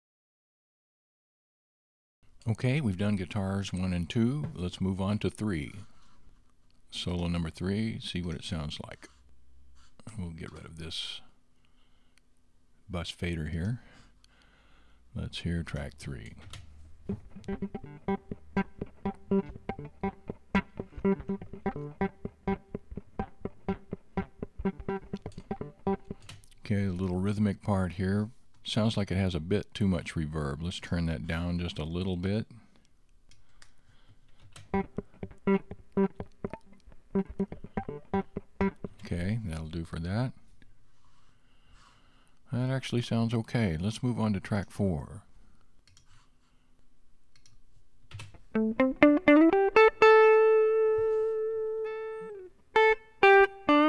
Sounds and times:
Speech: 2.4s - 5.9s, 6.9s - 9.1s, 10.0s - 11.4s, 12.9s - 13.9s, 15.1s - 16.5s, 26.5s - 32.7s, 39.0s - 40.4s, 42.5s - 45.3s
Music: 17.1s - 26.2s, 34.8s - 39.0s, 48.6s - 53.8s.

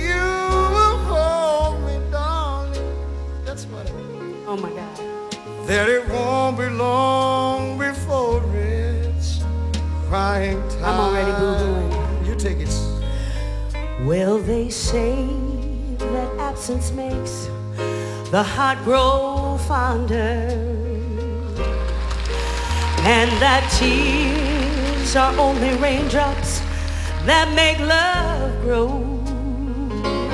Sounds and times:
Music: 0.0s - 30.3s
Speech: 3.5s - 5.0s.

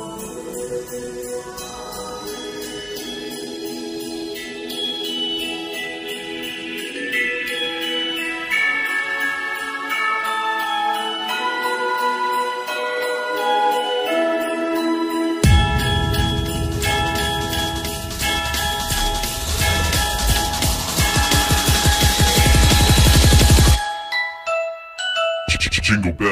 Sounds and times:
Drum and bass: 15.4s - 23.8s
Speech: 25.5s - 26.3s.

